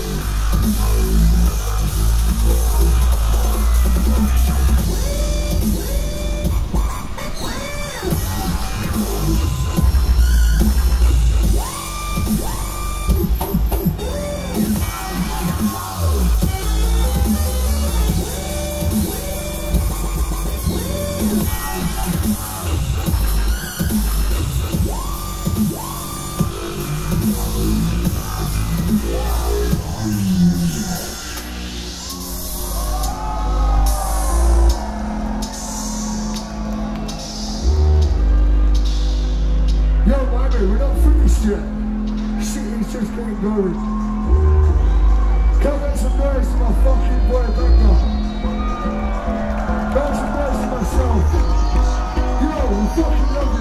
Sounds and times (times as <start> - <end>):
Dance music: 0.0 - 53.6.